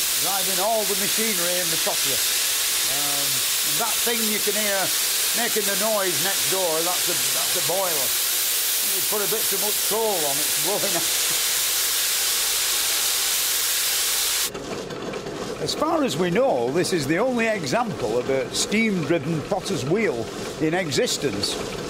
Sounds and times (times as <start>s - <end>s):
Speech: 0.2s - 2.2s, 2.9s - 8.1s, 8.8s - 11.1s, 15.6s - 21.7s.